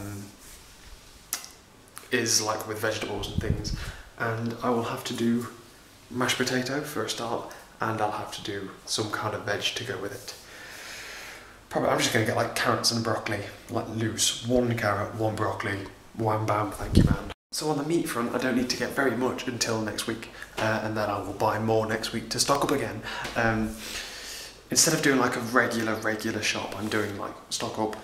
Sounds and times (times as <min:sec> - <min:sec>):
Speech: 0:00.0 - 0:00.4, 0:02.1 - 0:10.4, 0:11.7 - 0:23.8, 0:24.7 - 0:28.0
Inside, small room: 0:00.0 - 0:28.0.